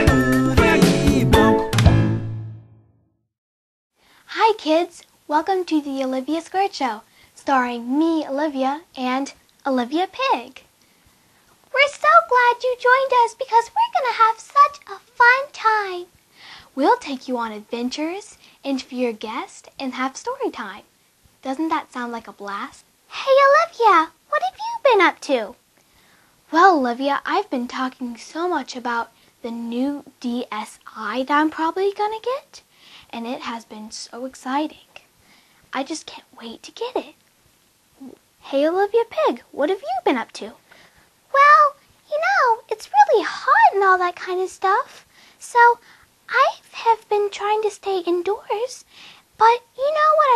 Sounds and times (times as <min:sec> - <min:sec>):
Speech: 0:04.3 - 0:10.7, 0:11.7 - 0:16.1, 0:16.7 - 0:25.6, 0:26.5 - 0:35.0, 0:35.7 - 0:37.2, 0:38.0 - 0:40.6, 0:41.3 - 0:50.3.